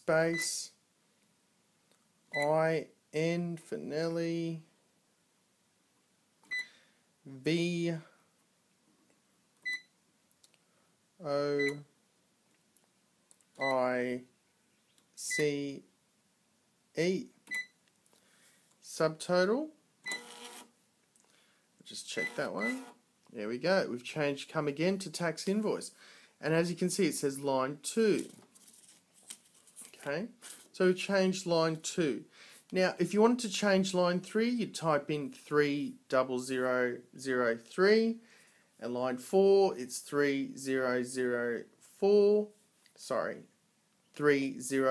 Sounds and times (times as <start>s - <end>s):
Speech: 0.0s - 0.8s, 2.4s - 4.7s, 7.3s - 8.1s, 11.2s - 11.9s, 13.6s - 14.3s, 15.2s - 15.9s, 17.0s - 17.4s, 18.8s - 19.8s, 21.8s - 28.3s, 30.0s - 38.2s, 38.8s - 43.5s, 44.2s - 44.9s
Beep, bleep: 9.7s - 9.9s, 17.5s - 17.8s.